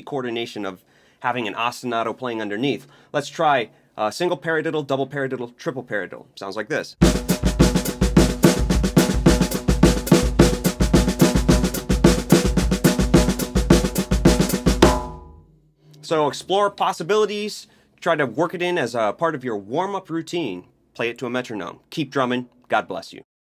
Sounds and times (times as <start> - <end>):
Speech: 0.0 - 7.0, 16.0 - 23.3
Drum kit: 7.0 - 15.4
Snare drum: 7.0 - 15.4
Bass drum: 7.0 - 15.5.